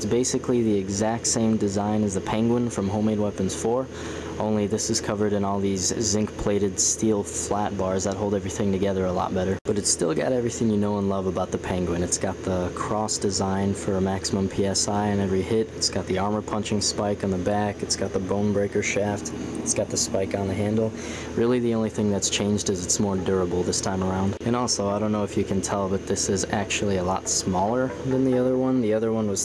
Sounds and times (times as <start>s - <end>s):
Speech: 0.0s - 29.4s.